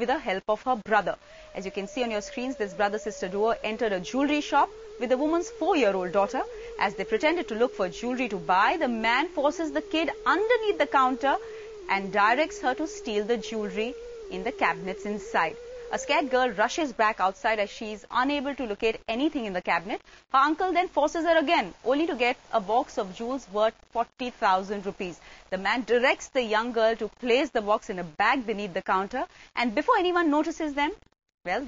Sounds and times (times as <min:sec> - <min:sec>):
Speech: 0:00.0 - 0:31.6.